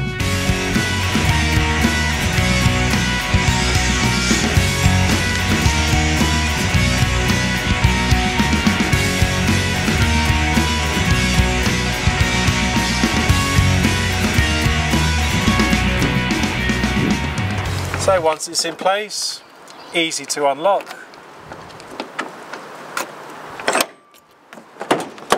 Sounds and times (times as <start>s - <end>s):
Music: 0.0s - 18.2s.